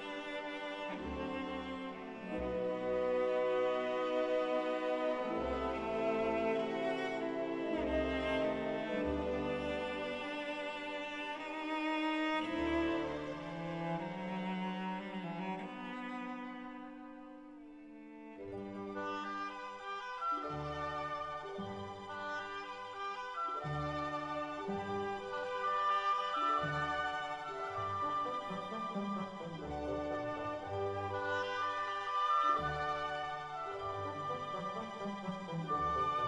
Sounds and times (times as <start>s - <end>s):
Cello: 0.0s - 36.2s.